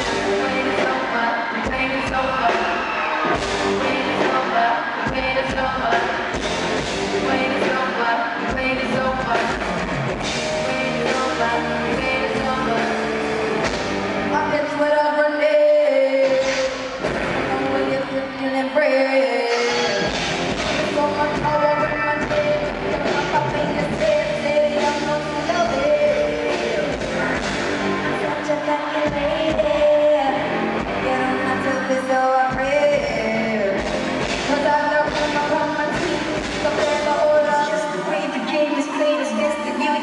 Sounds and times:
Music: 0.0 - 40.0.

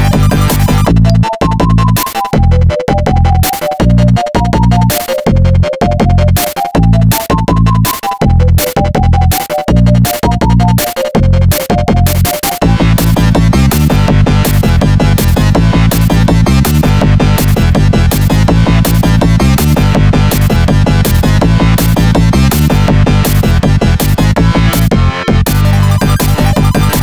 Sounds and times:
Music: 0.0 - 27.0.

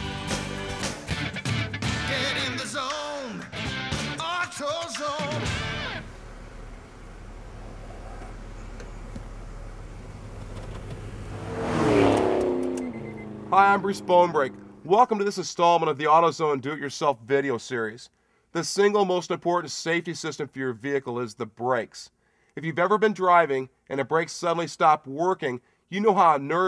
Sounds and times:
Car: 5.0 - 15.1
Speech: 13.5 - 26.6.

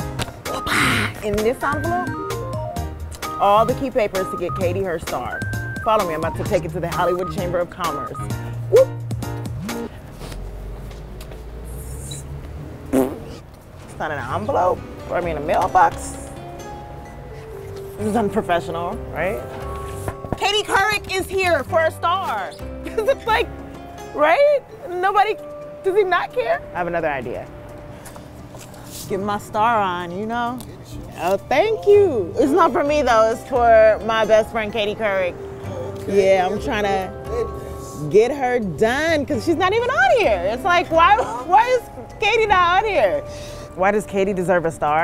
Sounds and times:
Music: 0.0 - 10.5, 14.0 - 45.0.

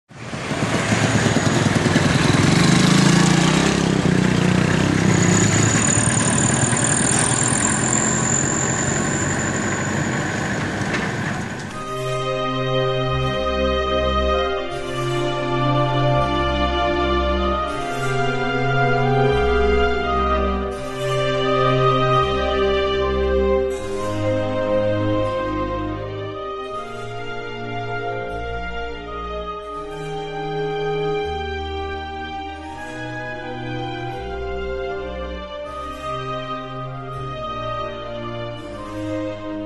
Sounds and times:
Outside, urban or manmade: 0.0 - 39.6
Motor vehicle (road): 0.1 - 28.5.

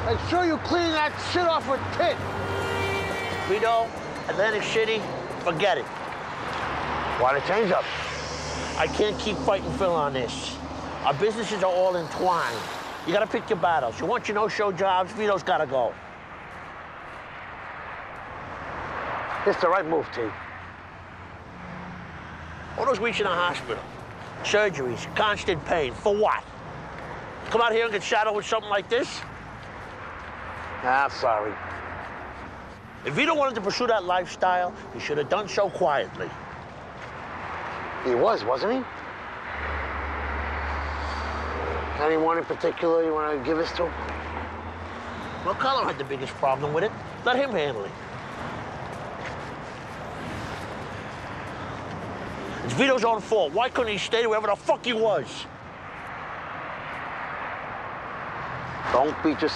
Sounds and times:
Speech: 8.8 - 16.0, 19.4 - 20.4, 22.8 - 26.5, 27.5 - 29.3, 30.8 - 31.6, 33.1 - 36.4, 42.0 - 44.0, 45.5 - 48.0, 52.6 - 55.5, 58.9 - 59.5.

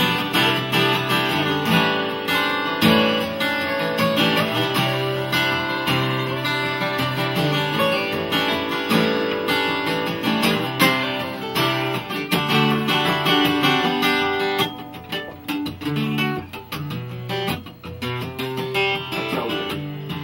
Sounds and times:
Acoustic guitar: 0.0 - 20.2.

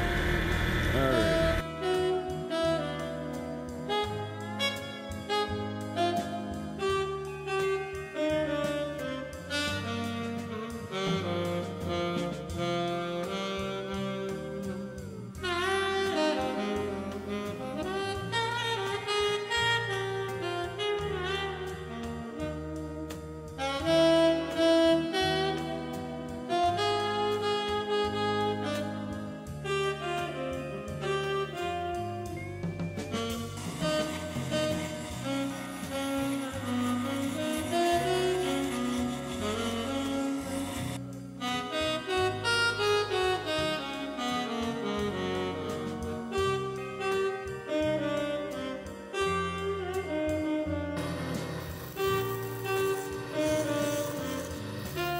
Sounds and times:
Saxophone: 0.0 - 55.1.

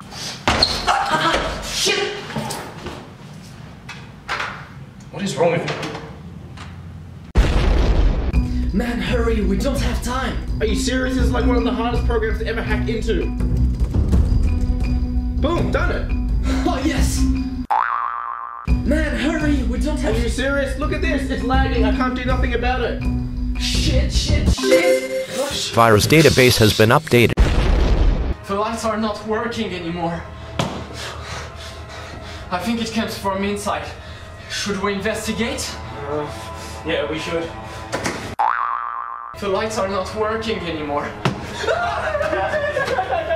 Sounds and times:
Music: 8.4 - 17.7, 18.7 - 26.0, 29.4 - 38.3, 39.4 - 43.3.

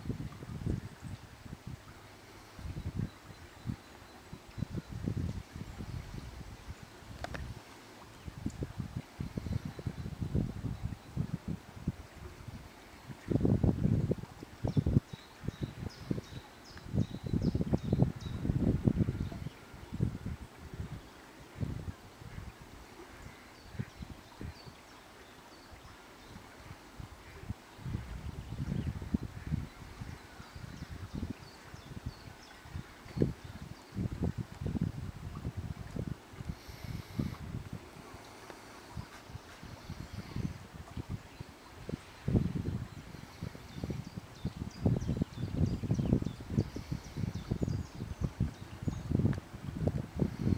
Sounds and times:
Wind noise (microphone): 0.0 - 24.8, 25.8 - 50.5.

